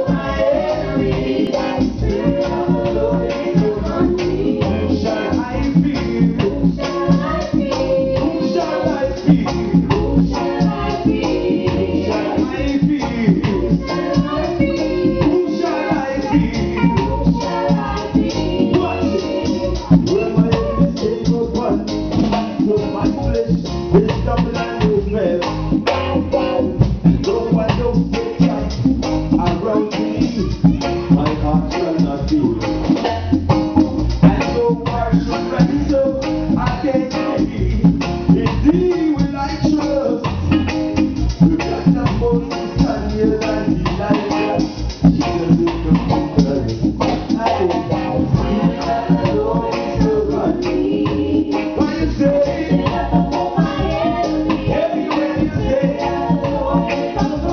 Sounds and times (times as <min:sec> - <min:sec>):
Guitar: 0:00.0 - 0:57.5
Jazz: 0:00.0 - 0:57.5.